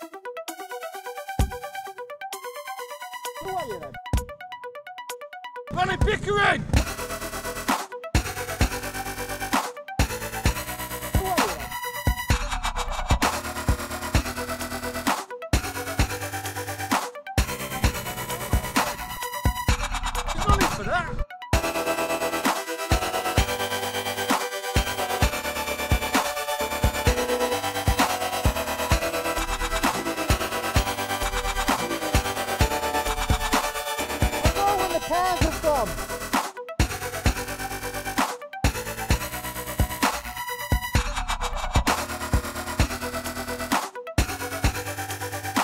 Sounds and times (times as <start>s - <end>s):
Dubstep: 6.8s - 45.6s.